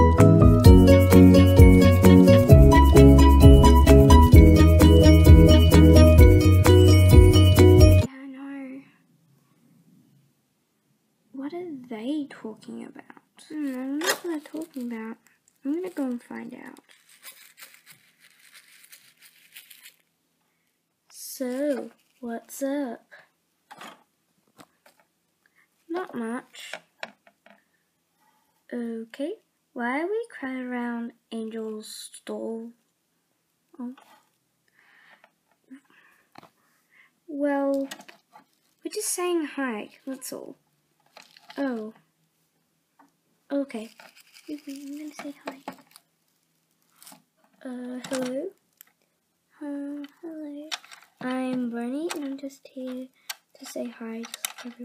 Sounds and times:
Speech: 8.1 - 9.0, 11.4 - 16.9, 21.1 - 23.2, 25.9 - 26.8, 28.7 - 32.8, 33.8 - 34.1, 37.3 - 38.0, 38.8 - 40.6, 41.6 - 42.0, 43.5 - 45.7, 47.6 - 48.6, 49.6 - 54.8.

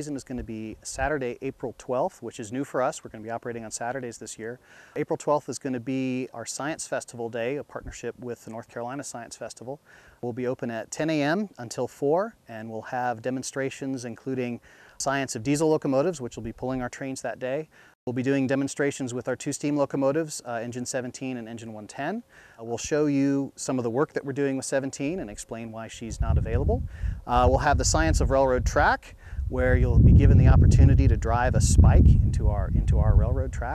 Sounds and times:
Speech: 0.0 - 33.7.

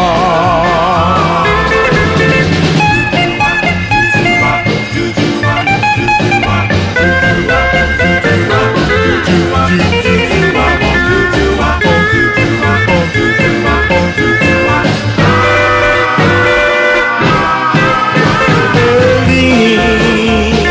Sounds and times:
Swing music: 0.0 - 20.7.

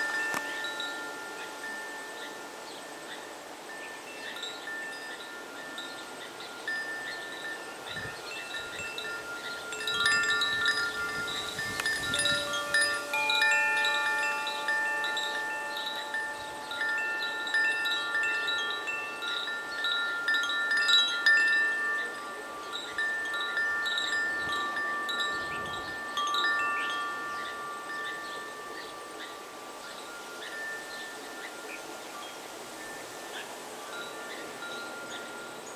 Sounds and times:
Wind chime: 0.0 - 35.7.

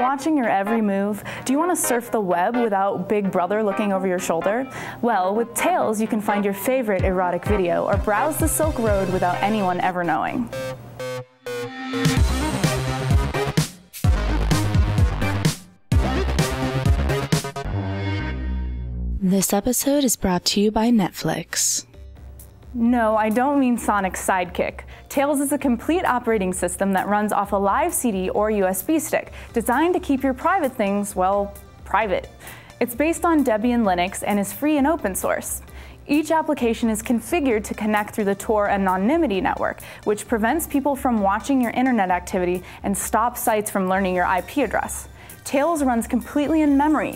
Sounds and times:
Narration, monologue: 0.0 - 11.0, 19.2 - 47.1.

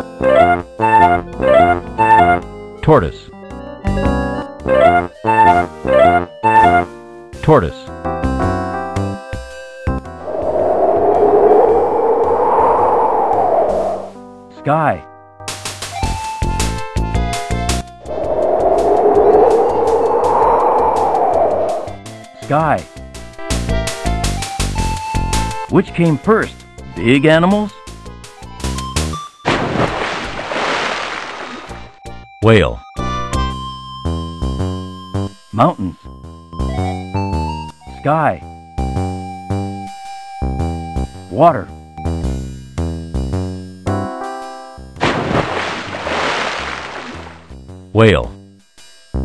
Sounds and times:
Music: 0.0 - 10.3, 14.1 - 19.0, 21.7 - 29.5, 31.7 - 45.0, 46.8 - 49.2
Speech: 2.8 - 3.3, 7.4 - 7.9, 14.6 - 15.1, 22.4 - 22.8, 25.7 - 27.8, 32.4 - 32.8, 35.6 - 36.0, 38.0 - 38.4, 41.3 - 41.7, 48.0 - 48.4.

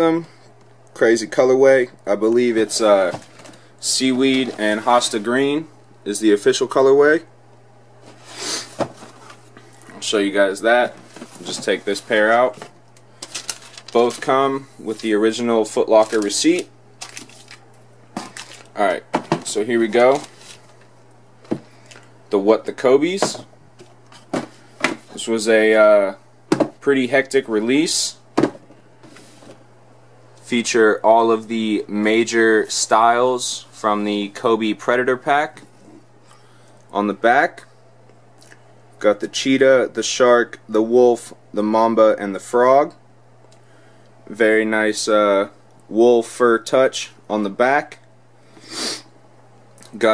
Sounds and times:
Speech: 0.0 - 0.4, 1.0 - 3.2, 3.8 - 7.3, 9.9 - 12.6, 14.0 - 16.7, 18.8 - 20.3, 22.3 - 23.5, 25.1 - 26.2, 26.8 - 28.2, 30.4 - 35.7, 36.9 - 37.7, 39.0 - 43.0, 44.3 - 48.1, 49.8 - 50.1.

